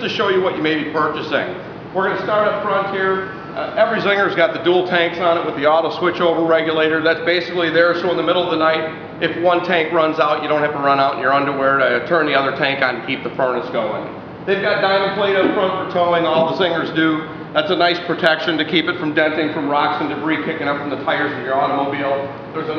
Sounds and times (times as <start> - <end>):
Speech: 0.0 - 22.7.